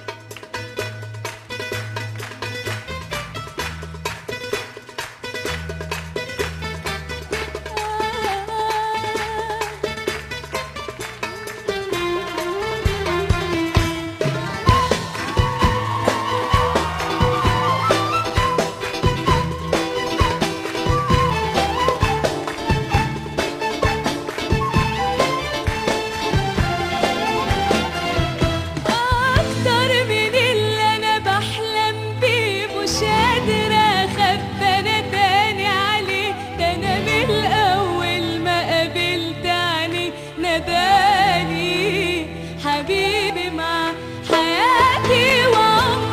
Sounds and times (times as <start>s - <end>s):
Music: 0.0s - 46.1s.